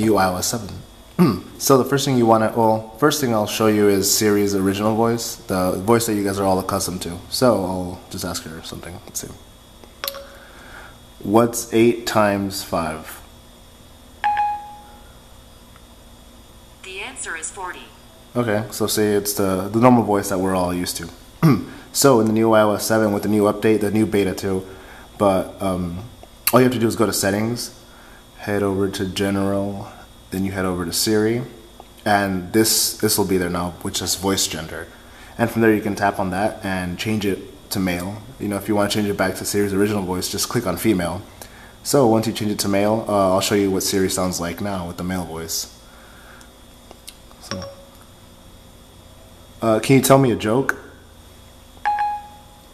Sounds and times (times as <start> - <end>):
Male speech, man speaking: 0.0 - 9.4, 11.2 - 13.2, 18.4 - 27.8, 28.4 - 45.8, 49.6 - 50.9.